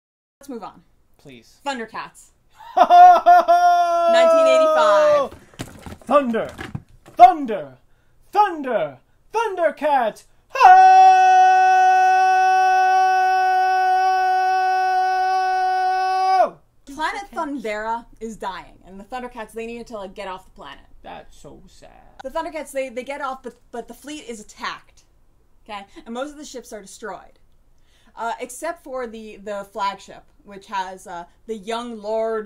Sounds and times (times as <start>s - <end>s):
Inside, small room: 0.4s - 32.4s.